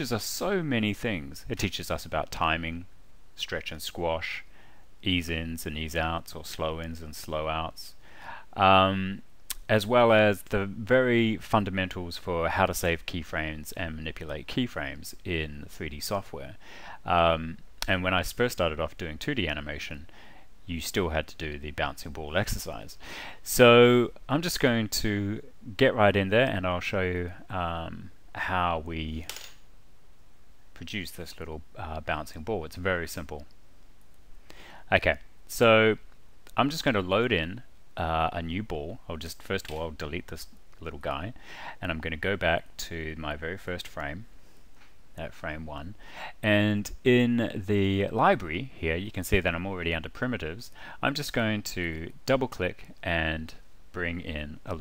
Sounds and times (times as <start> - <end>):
Speech: 0.0 - 29.3, 30.8 - 33.5, 34.9 - 44.3, 45.2 - 54.8.